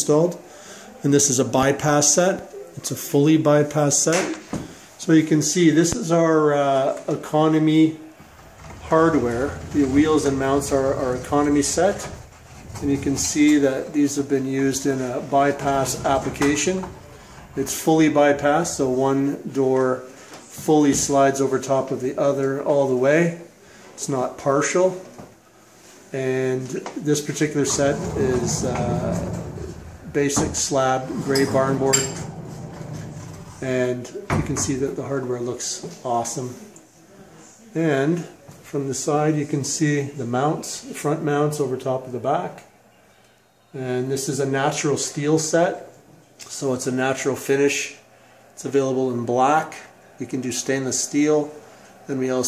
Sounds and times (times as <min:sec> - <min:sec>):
Speech: 0:00.0 - 0:04.4, 0:05.0 - 0:08.1, 0:08.7 - 0:25.2, 0:26.1 - 0:32.3, 0:33.6 - 0:42.7, 0:43.7 - 0:48.0, 0:48.6 - 0:52.4
Sliding door: 0:08.2 - 0:19.0, 0:27.3 - 0:33.8.